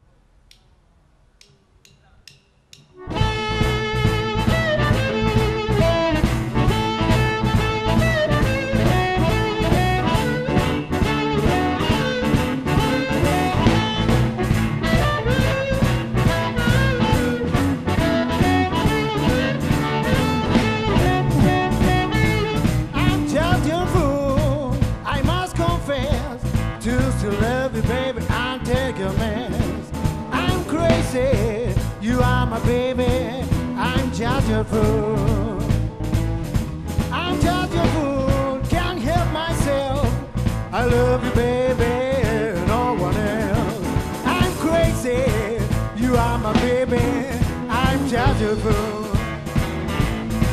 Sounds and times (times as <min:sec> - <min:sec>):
Music: 0:01.4 - 0:50.5.